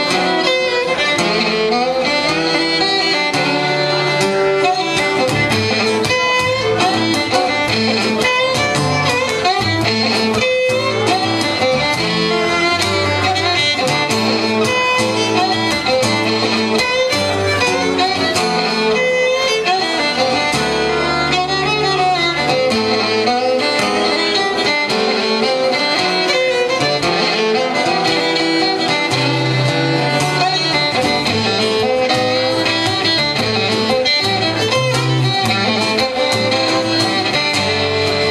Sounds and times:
Acoustic guitar: 0:00.0 - 0:38.3
Strum: 0:00.0 - 0:38.3
Violin, fiddle: 0:00.0 - 0:38.3.

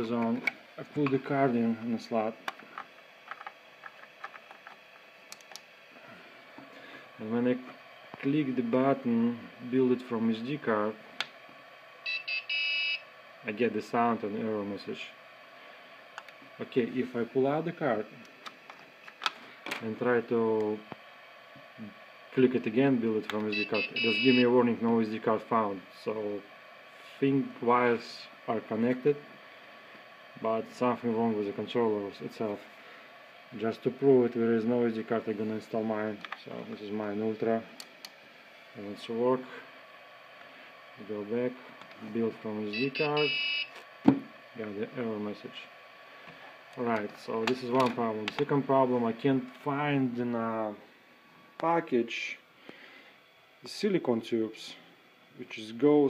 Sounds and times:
Speech: 0:00.0 - 0:02.4, 0:07.2 - 0:11.0, 0:13.4 - 0:15.2, 0:16.6 - 0:18.2, 0:19.8 - 0:20.9, 0:21.8 - 0:26.5, 0:27.1 - 0:29.2, 0:30.4 - 0:32.7, 0:33.5 - 0:37.7, 0:38.8 - 0:39.7, 0:41.0 - 0:43.3, 0:44.6 - 0:45.7, 0:46.8 - 0:50.8, 0:51.6 - 0:52.4, 0:53.6 - 0:54.8, 0:55.4 - 0:56.0.

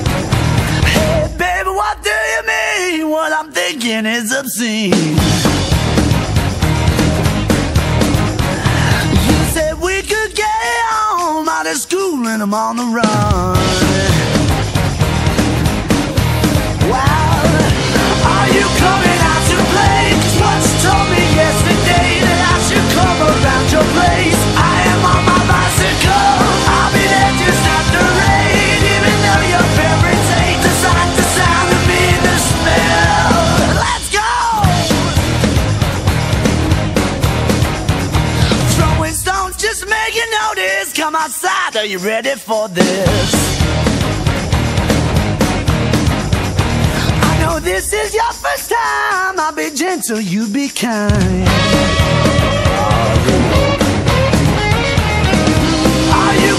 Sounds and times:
Music: 0:00.0 - 0:56.5.

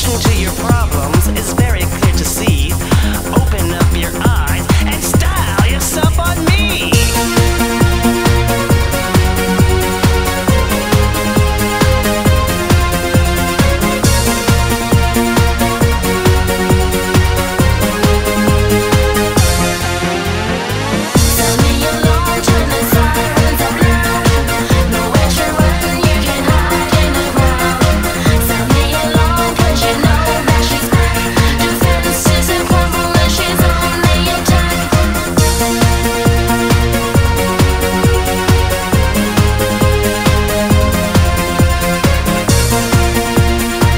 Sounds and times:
Music: 0:00.0 - 0:43.9.

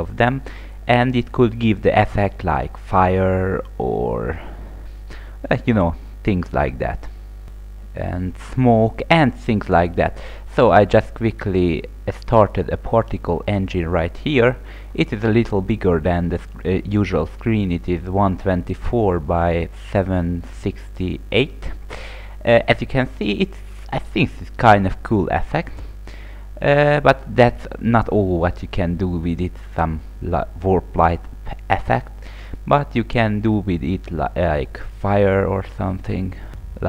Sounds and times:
Speech: 0:00.0 - 0:04.5, 0:05.4 - 0:07.1, 0:08.0 - 0:21.8, 0:22.4 - 0:25.8, 0:26.6 - 0:36.8.

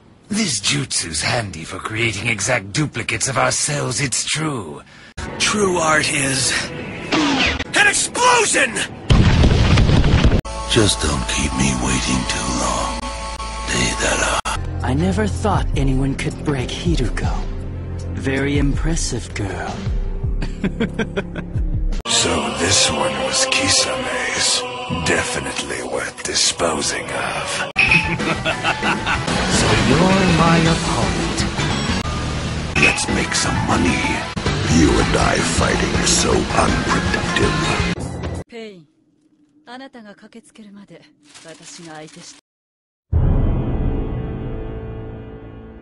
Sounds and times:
Speech: 0:00.3 - 0:04.8, 0:05.4 - 0:06.7, 0:10.7 - 0:13.0, 0:13.7 - 0:17.5, 0:18.2 - 0:19.8, 0:22.1 - 0:27.7, 0:32.8 - 0:38.9
Music: 0:05.2 - 0:09.0, 0:10.5 - 0:38.5, 0:43.1 - 0:45.8.

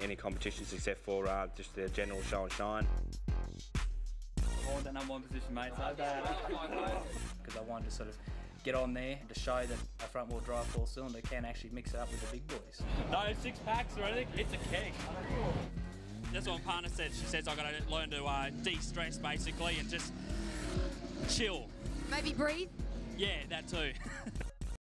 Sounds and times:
Speech: 0:00.0 - 0:02.8, 0:04.7 - 0:15.6, 0:16.3 - 0:20.0
Music: 0:00.0 - 0:24.8
Car: 0:12.8 - 0:24.0.

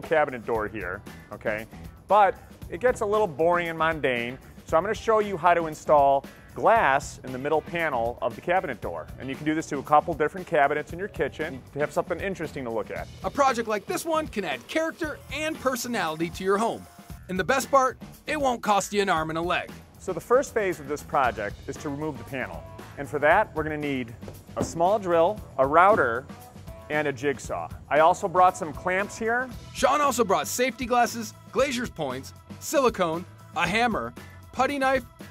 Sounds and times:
Speech: 0:00.0 - 0:26.2, 0:26.9 - 0:35.0
Music: 0:00.0 - 0:35.3.

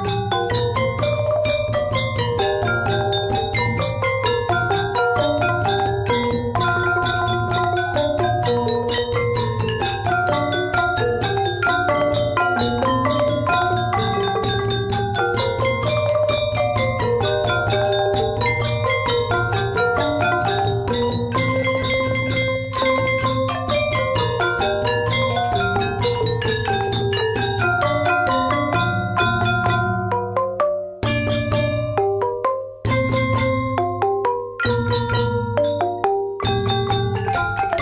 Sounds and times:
Traditional music: 0:00.0 - 0:37.8.

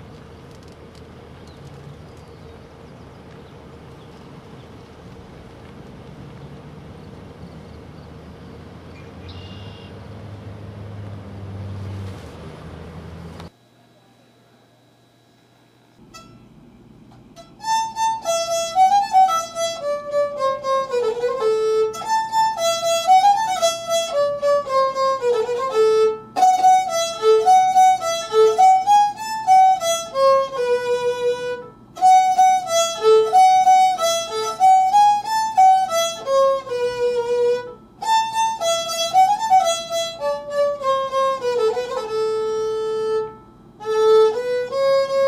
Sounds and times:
Violin, fiddle: 0:17.6 - 0:45.2.

